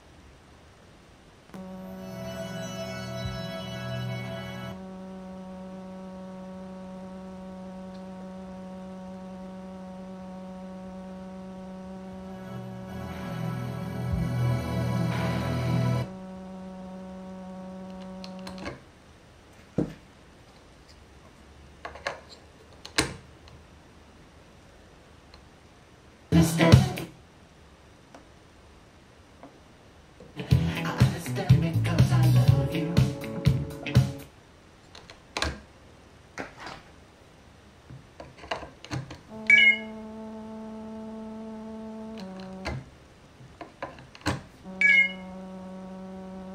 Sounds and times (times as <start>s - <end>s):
Music: 1.8s - 4.8s, 12.4s - 16.1s, 26.4s - 27.1s, 30.4s - 34.3s.